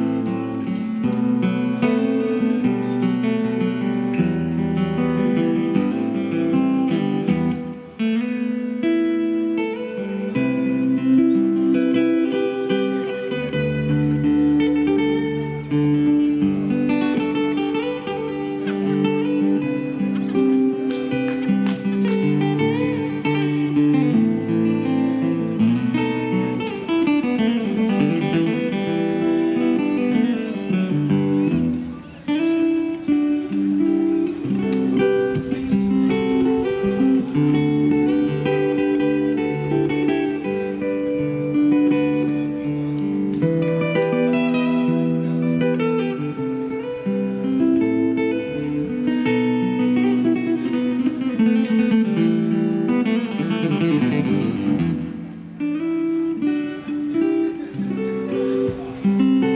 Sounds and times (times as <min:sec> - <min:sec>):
Acoustic guitar: 0:00.0 - 0:59.5.